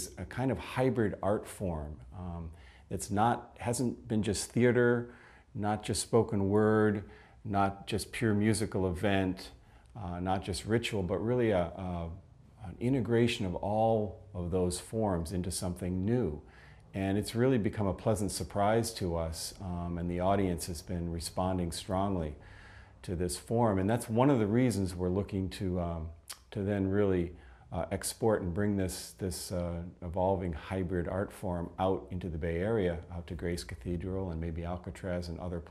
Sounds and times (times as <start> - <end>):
Speech: 0.0 - 22.4, 23.0 - 35.7.